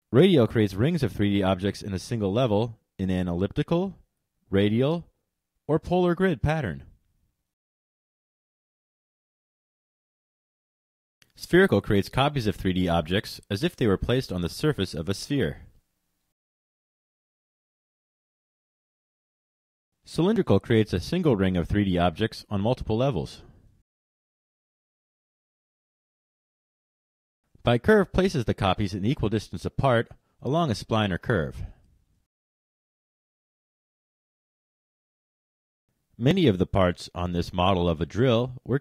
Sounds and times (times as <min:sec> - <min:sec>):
Speech: 0:00.1 - 0:07.0, 0:11.3 - 0:15.8, 0:20.1 - 0:23.5, 0:27.6 - 0:31.8, 0:36.2 - 0:38.8.